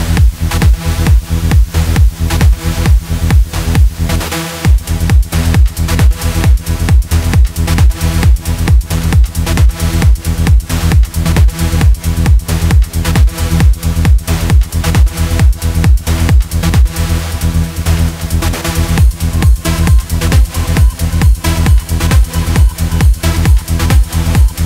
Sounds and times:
Techno: 0:00.0 - 0:24.6
Trance music: 0:00.0 - 0:24.6.

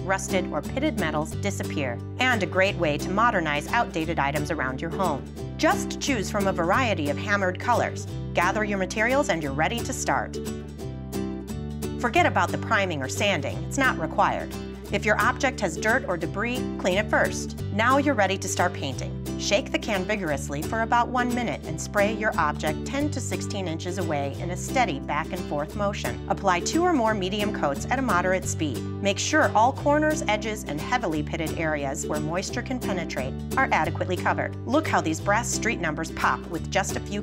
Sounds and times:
Speech: 0:00.0 - 0:10.4, 0:12.0 - 0:37.2
Music: 0:00.0 - 0:37.2.

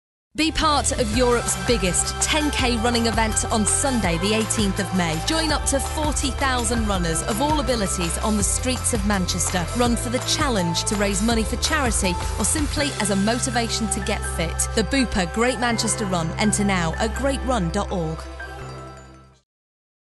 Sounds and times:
Speech: 0:00.4 - 0:18.2
Music: 0:00.4 - 0:19.5.

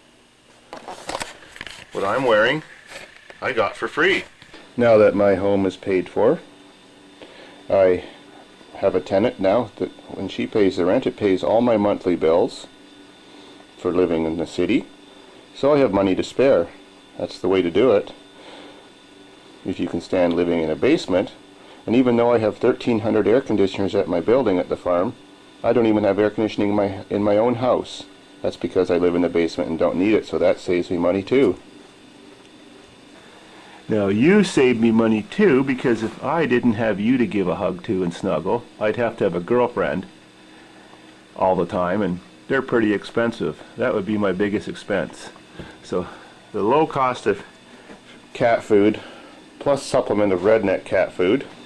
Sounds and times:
Inside, small room: 0:00.0 - 0:51.6
Speech: 0:01.9 - 0:02.7, 0:03.4 - 0:06.5, 0:07.7 - 0:12.8, 0:13.8 - 0:14.9, 0:15.5 - 0:18.2, 0:19.6 - 0:31.6, 0:33.9 - 0:40.1, 0:41.4 - 0:47.5, 0:48.3 - 0:51.6.

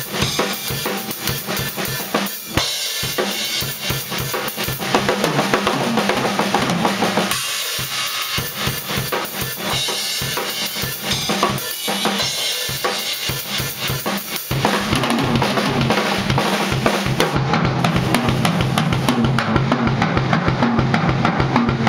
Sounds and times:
Drum: 0:00.0 - 0:21.8
Drum kit: 0:00.0 - 0:21.8.

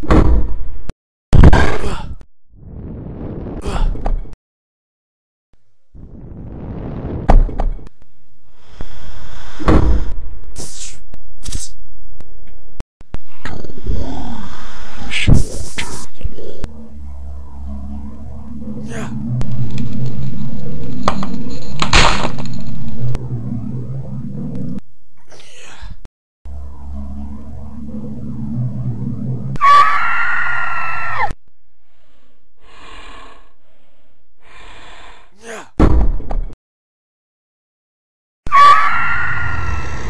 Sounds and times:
Sound effect: 0:00.0 - 0:04.4, 0:05.7 - 0:11.8, 0:12.4 - 0:31.4, 0:38.5 - 0:40.0.

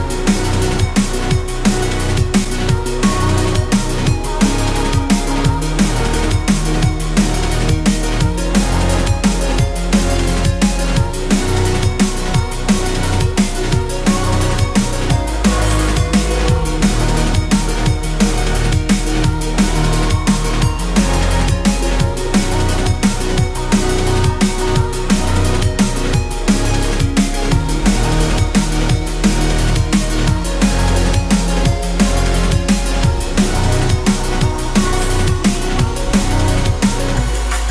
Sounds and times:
Soul music: 0:00.0 - 0:37.7
Soundtrack music: 0:00.0 - 0:37.7.

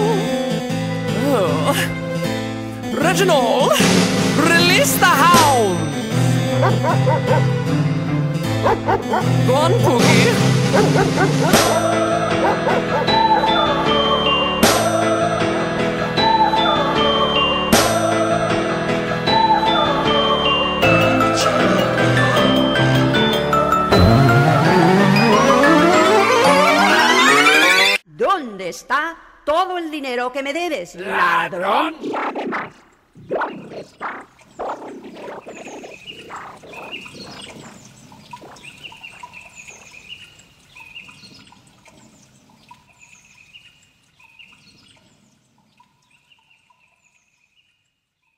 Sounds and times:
Chirp, tweet: 0:34.4 - 0:48.3.

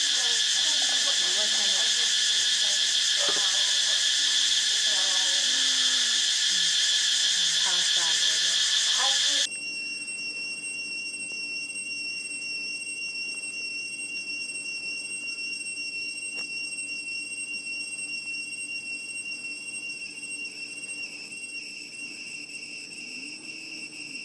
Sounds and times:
Insect: 0:00.0 - 0:24.2.

